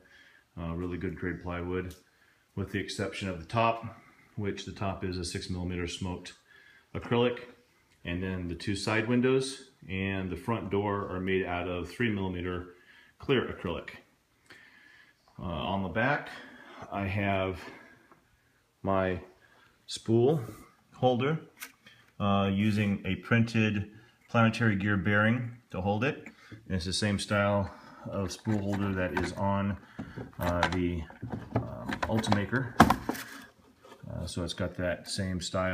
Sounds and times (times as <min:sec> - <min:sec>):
Speech: 0:00.6 - 0:14.1, 0:15.4 - 0:17.8, 0:18.8 - 0:19.3, 0:19.9 - 0:21.6, 0:22.2 - 0:29.8, 0:30.4 - 0:32.8, 0:33.9 - 0:35.7.